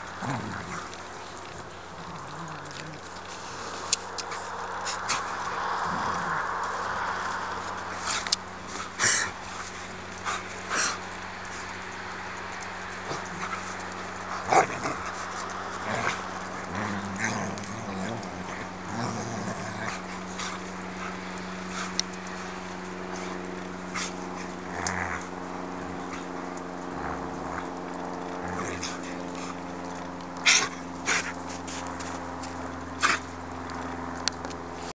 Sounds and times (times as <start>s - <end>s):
Dog: 33.0s - 33.3s.